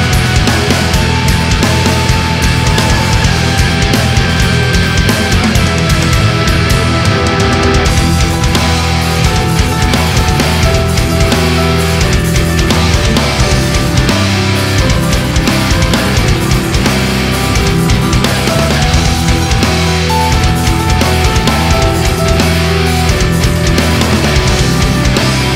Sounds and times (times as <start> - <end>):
Music: 0.0 - 25.5.